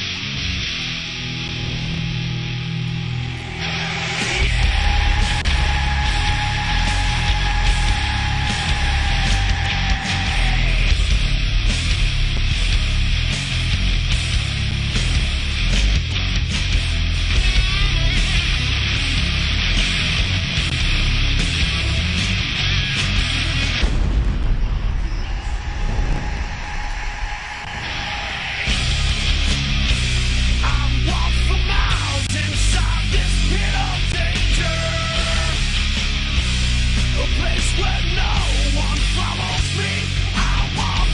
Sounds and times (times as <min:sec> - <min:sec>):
Music: 0:00.0 - 0:26.4, 0:27.6 - 0:41.1.